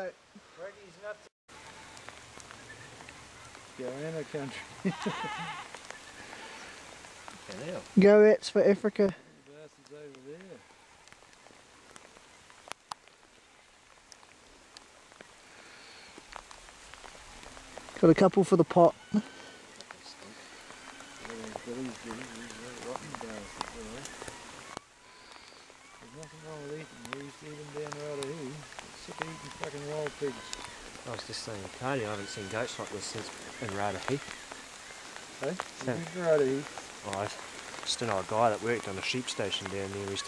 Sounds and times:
Animal: 1.5 - 7.9, 18.8 - 40.2.

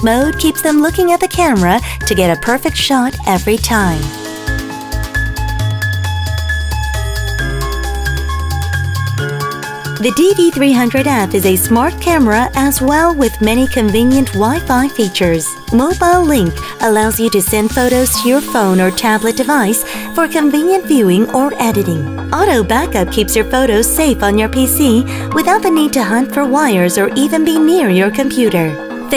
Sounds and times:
Speech: 0.0 - 4.1, 10.0 - 29.1
Music: 0.0 - 29.1.

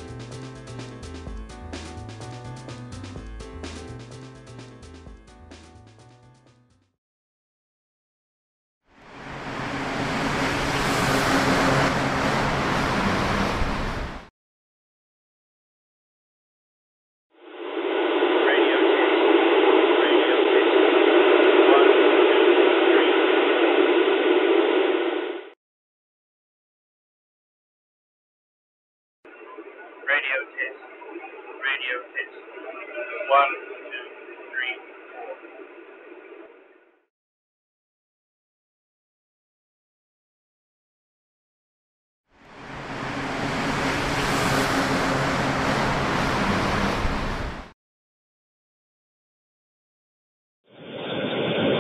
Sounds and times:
Speech: 18.4 - 19.2, 20.0 - 20.8, 21.6 - 23.2, 29.6 - 35.6.

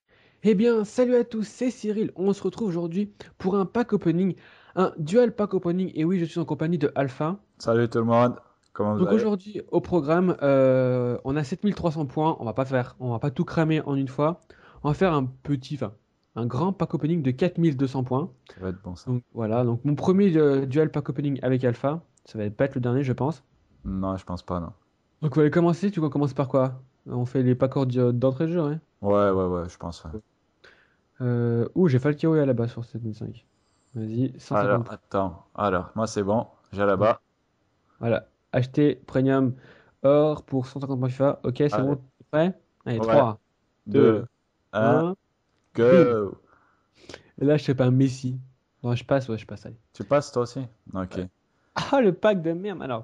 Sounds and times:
Speech: 0.4 - 30.2, 31.2 - 33.4, 34.0 - 37.2, 38.0 - 45.2, 45.8 - 46.4, 47.4 - 53.0.

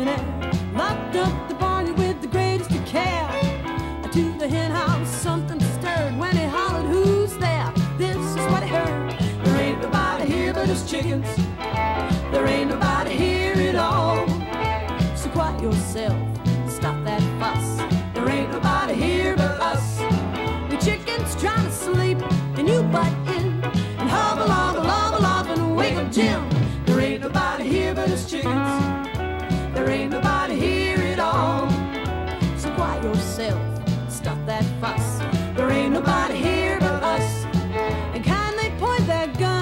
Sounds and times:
Bowed string instrument: 0.0 - 39.6.

